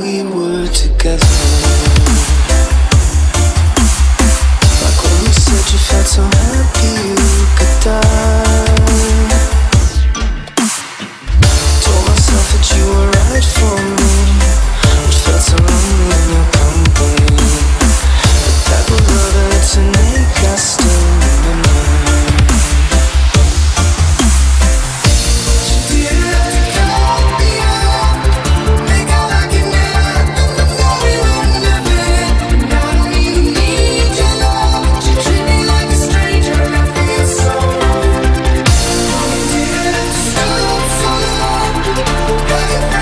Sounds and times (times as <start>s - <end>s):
Dubstep: 0.0s - 43.0s.